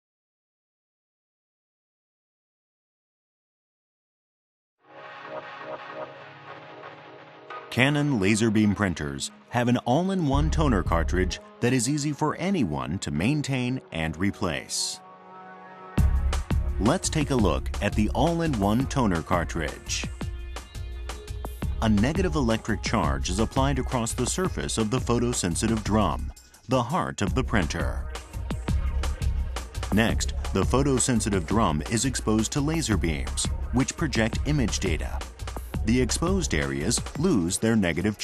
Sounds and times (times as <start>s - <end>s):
Music: 4.8s - 38.2s
Speech: 7.7s - 15.0s, 16.8s - 20.1s, 21.8s - 28.1s, 29.9s - 35.2s, 35.8s - 38.2s.